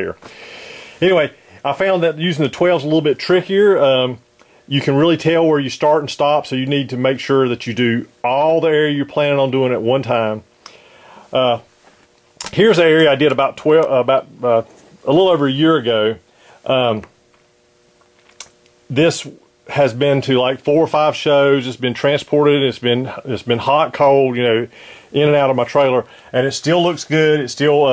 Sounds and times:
Speech: 0.0s - 0.2s, 1.0s - 10.5s, 11.3s - 11.7s, 12.4s - 17.1s, 18.9s - 27.9s.

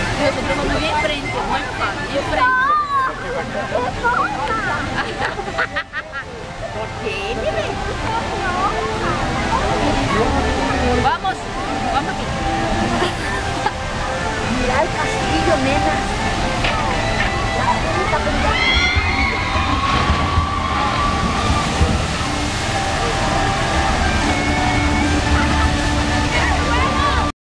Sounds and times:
Music: 0.0s - 27.3s
Water: 0.0s - 27.3s.

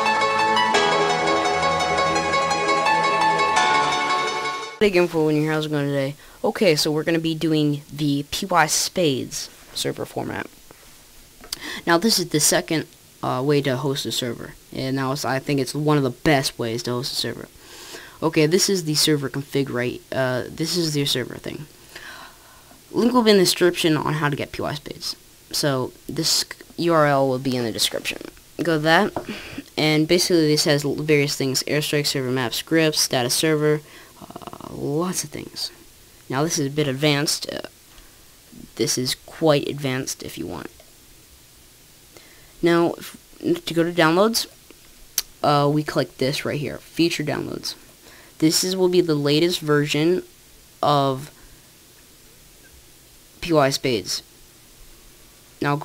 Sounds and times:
Narration, monologue: 1.3s - 55.8s.

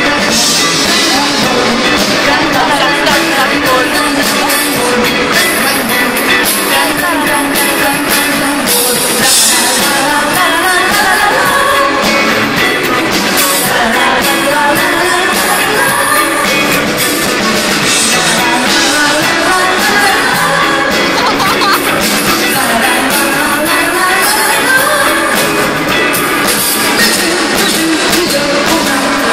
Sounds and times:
Independent music: 0.0s - 29.3s.

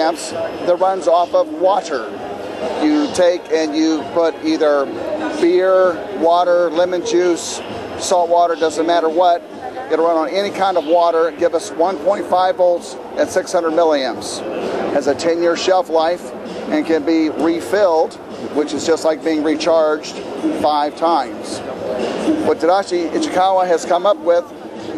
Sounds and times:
Speech: 0.0s - 21.8s, 22.4s - 24.9s.

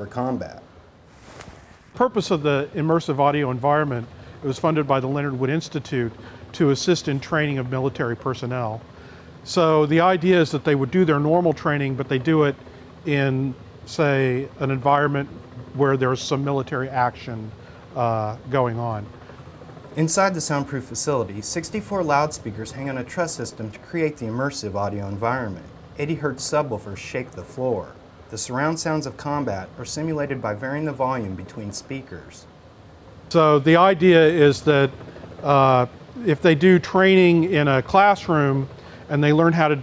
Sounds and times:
Speech: 0.0s - 0.6s, 2.0s - 8.8s, 9.5s - 19.1s, 20.0s - 32.5s, 33.3s - 39.8s.

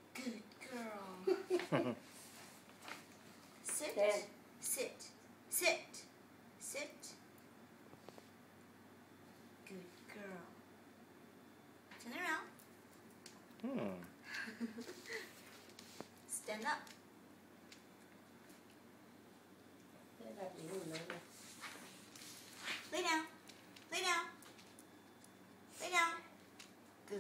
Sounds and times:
Speech: 3.7s - 7.2s, 9.6s - 10.6s, 20.2s - 21.3s.

